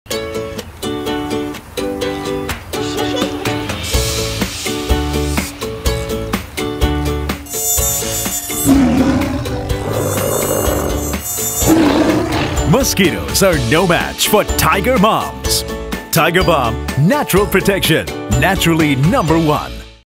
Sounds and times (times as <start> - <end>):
Music: 0.1 - 20.0
Speech: 12.7 - 19.8.